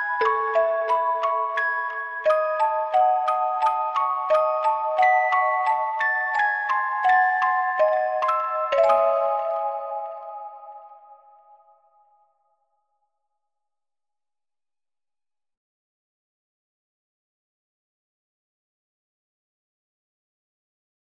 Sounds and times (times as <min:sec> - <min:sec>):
Music: 0:00.0 - 0:13.5.